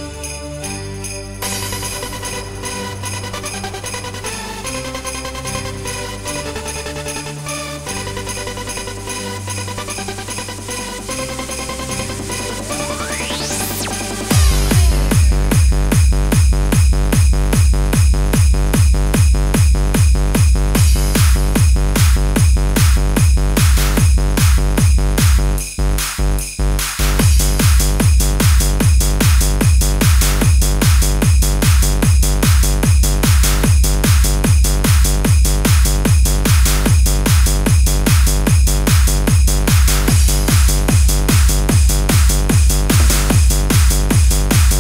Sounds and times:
Music: 0:00.0 - 0:44.8.

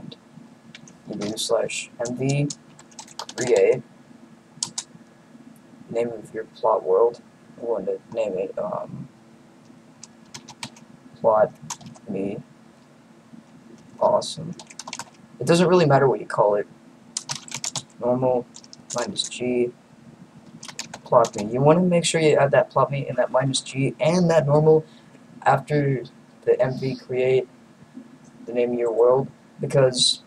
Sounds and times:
Speech: 0:00.0 - 0:00.2, 0:01.1 - 0:02.6, 0:03.3 - 0:03.8, 0:05.9 - 0:09.1, 0:11.2 - 0:12.5, 0:14.0 - 0:14.6, 0:15.4 - 0:16.7, 0:18.0 - 0:19.8, 0:21.0 - 0:27.5, 0:28.4 - 0:30.2
Typing: 0:02.0 - 0:03.8, 0:04.6 - 0:04.9, 0:10.0 - 0:10.8, 0:11.6 - 0:12.1, 0:14.5 - 0:15.2, 0:17.2 - 0:19.4, 0:20.6 - 0:21.5.

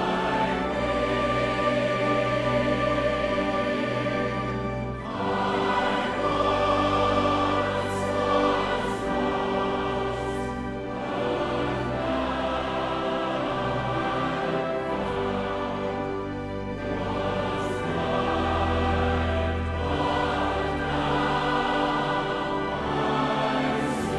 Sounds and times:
Choir: 0:00.0 - 0:24.1.

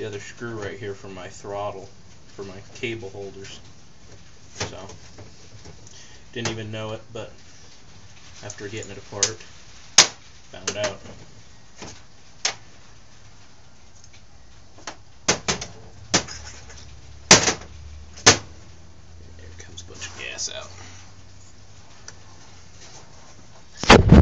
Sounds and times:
Speech: 0:00.0 - 0:03.7, 0:04.6 - 0:05.0, 0:06.3 - 0:07.4, 0:08.4 - 0:09.5, 0:10.5 - 0:11.2, 0:19.3 - 0:21.0
Inside, small room: 0:00.0 - 0:24.2.

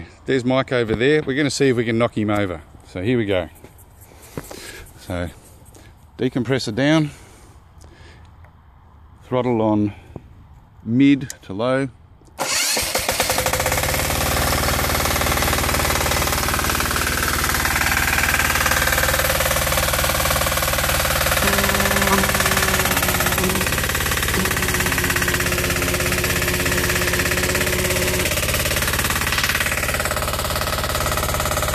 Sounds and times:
Speech: 0:00.3 - 0:03.6, 0:05.0 - 0:05.4, 0:06.2 - 0:07.2, 0:09.2 - 0:10.0, 0:10.8 - 0:12.0.

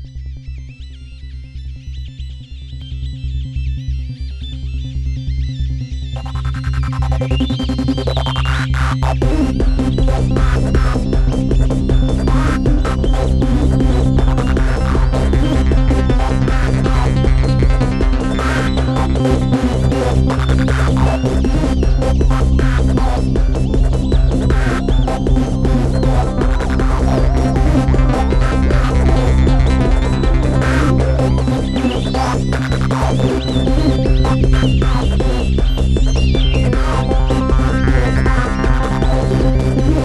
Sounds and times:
Techno: 0:00.0 - 0:40.0.

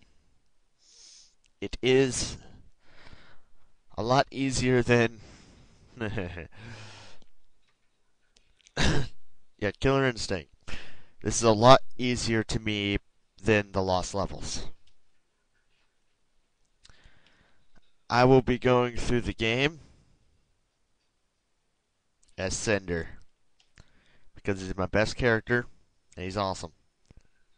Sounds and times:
Speech: 0:01.6 - 0:02.6, 0:03.9 - 0:05.2, 0:06.0 - 0:06.5, 0:09.6 - 0:10.5, 0:11.2 - 0:14.8, 0:18.1 - 0:19.8, 0:22.3 - 0:23.3, 0:24.4 - 0:26.8.

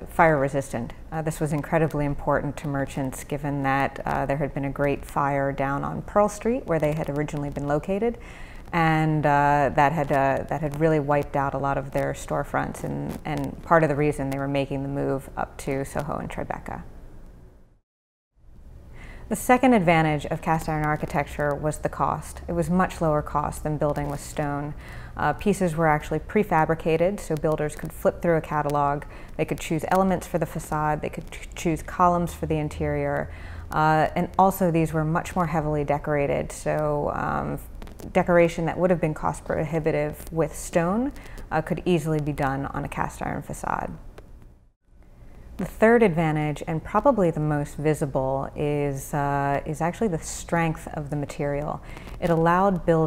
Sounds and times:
Speech: 0:00.1 - 0:16.9, 0:19.3 - 0:44.0, 0:45.6 - 0:53.0
Inside, small room: 0:18.4 - 0:53.0.

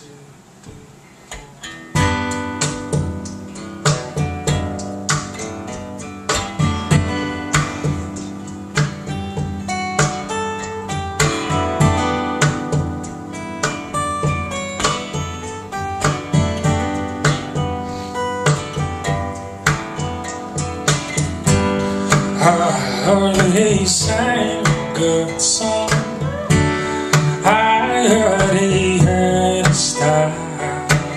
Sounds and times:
Guitar: 0:00.0 - 0:31.1.

